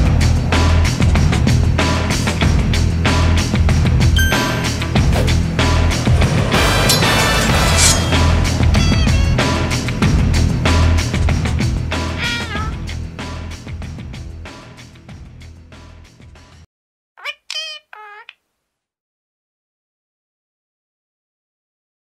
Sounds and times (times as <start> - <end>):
Music: 0.0 - 16.7.